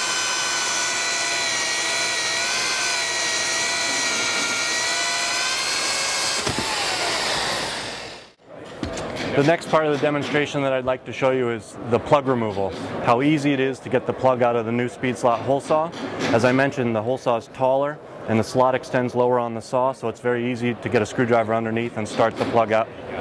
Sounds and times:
Drill: 0.0 - 8.4
Speech: 9.3 - 23.2.

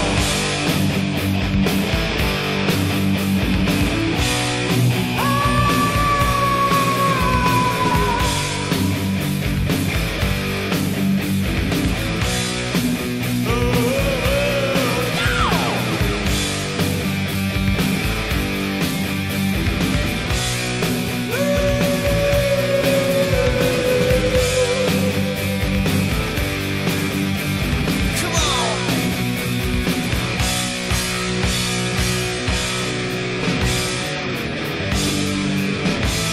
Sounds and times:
Music: 0.0 - 36.3.

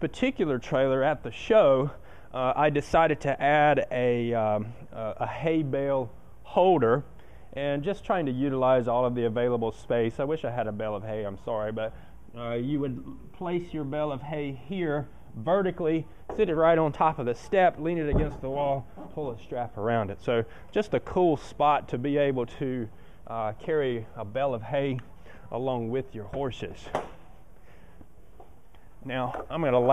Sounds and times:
Speech: 0.0 - 27.0, 29.0 - 29.9.

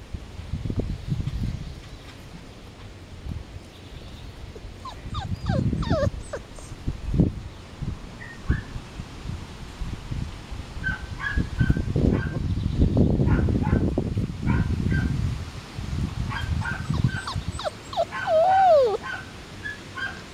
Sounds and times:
Dog: 4.8 - 6.8, 16.3 - 20.3.

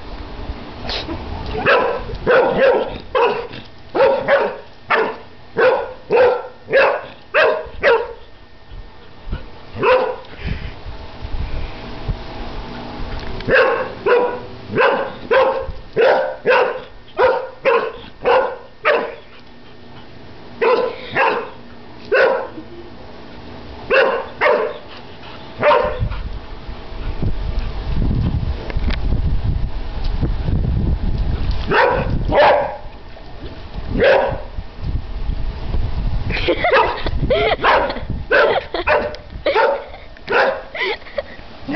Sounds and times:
Bark: 1.6 - 8.2, 9.8 - 10.2, 13.5 - 19.2, 20.6 - 22.6, 23.9 - 24.8, 25.6 - 26.1, 31.7 - 32.8, 34.0 - 34.5, 37.6 - 40.7.

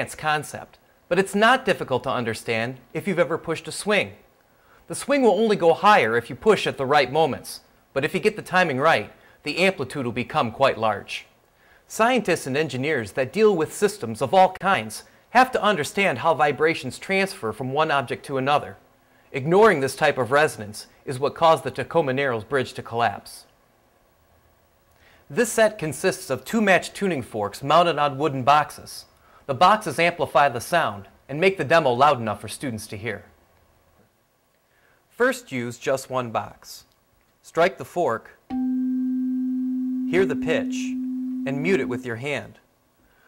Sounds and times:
Speech: 0.0 - 4.2, 4.9 - 23.5, 25.3 - 33.3, 35.1 - 38.4, 40.1 - 42.6.

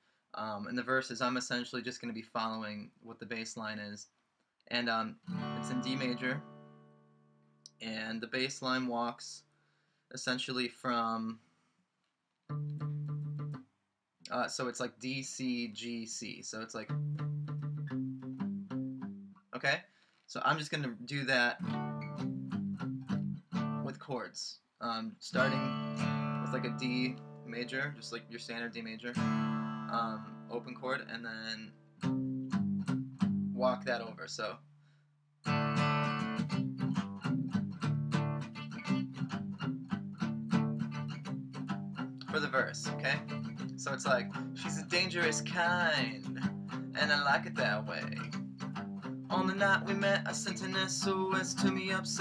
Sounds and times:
Speech: 0.4 - 4.1, 4.7 - 6.4, 7.7 - 9.5, 10.1 - 11.4, 14.3 - 16.9, 19.6 - 21.6, 23.8 - 25.7, 26.5 - 29.2, 29.9 - 31.7, 33.6 - 34.6, 42.2 - 48.3, 49.3 - 52.2
Strum: 4.8 - 7.1, 25.3 - 33.6, 35.5 - 52.2.

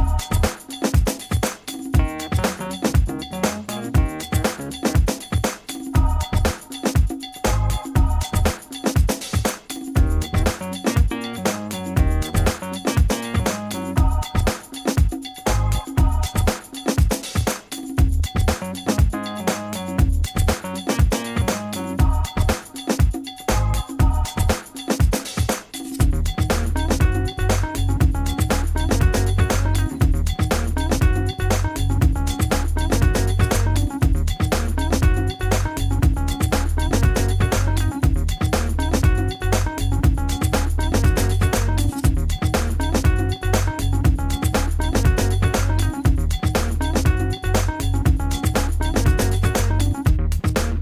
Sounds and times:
Music: 0.0 - 50.8.

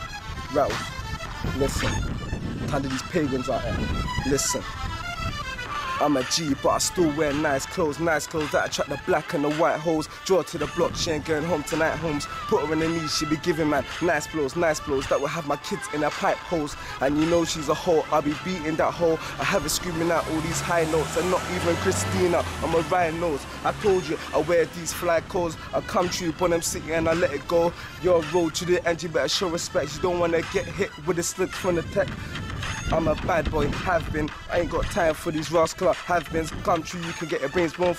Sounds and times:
Hip hop music: 0.0 - 37.9.

